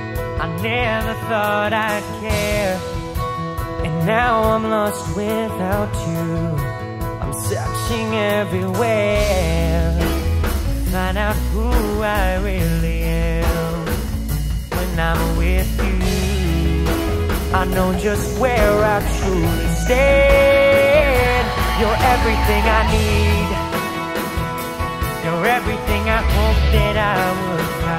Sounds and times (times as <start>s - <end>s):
Independent music: 0.0s - 27.9s.